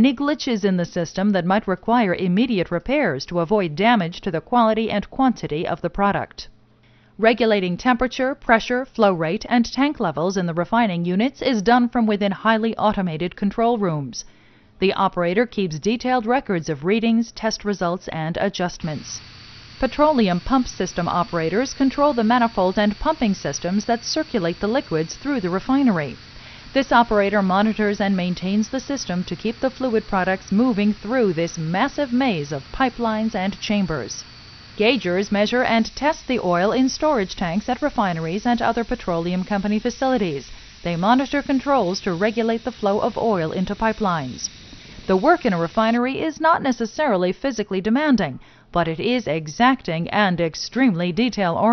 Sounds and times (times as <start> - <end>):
Speech: 0.0 - 6.5, 7.2 - 19.2, 19.8 - 26.2, 26.8 - 34.2, 34.8 - 44.5, 45.1 - 51.7.